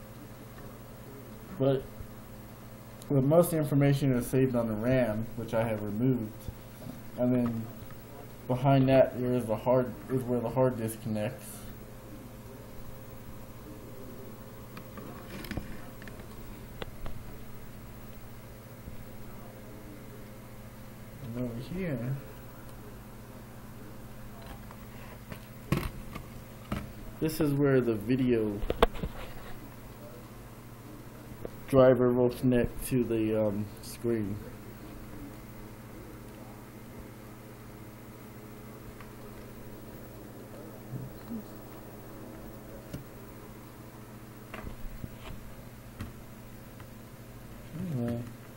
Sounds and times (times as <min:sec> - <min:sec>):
Inside, small room: 0:00.0 - 0:48.5
Speech: 0:00.2 - 0:02.0, 0:03.0 - 0:06.5, 0:07.2 - 0:12.8, 0:19.1 - 0:20.4, 0:21.2 - 0:23.1, 0:27.2 - 0:28.8, 0:30.0 - 0:36.7, 0:47.7 - 0:48.3.